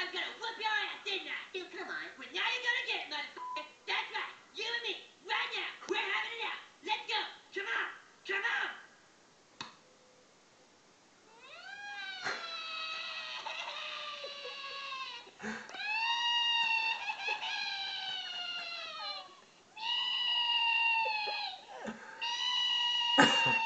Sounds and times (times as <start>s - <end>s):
Crying, sobbing: 11.3s - 23.6s.